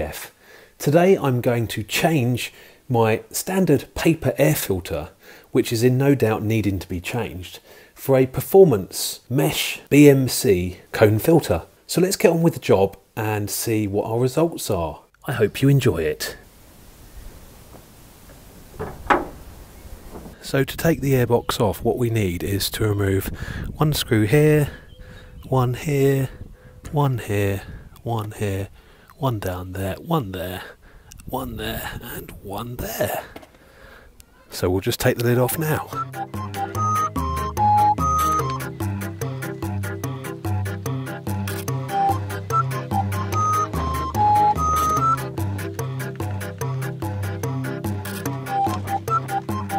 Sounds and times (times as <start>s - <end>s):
Speech: 0.0s - 16.4s, 20.4s - 24.8s, 25.4s - 33.3s, 34.2s - 36.0s.